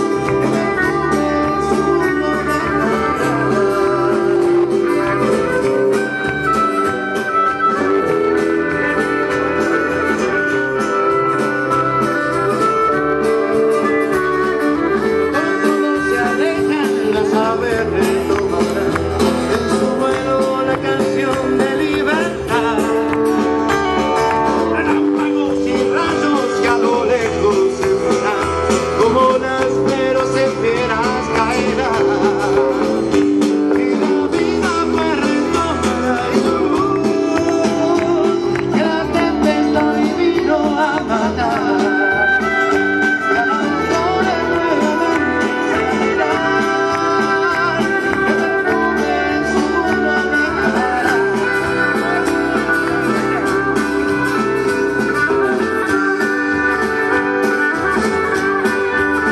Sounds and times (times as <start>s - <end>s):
Country: 0.0s - 59.3s.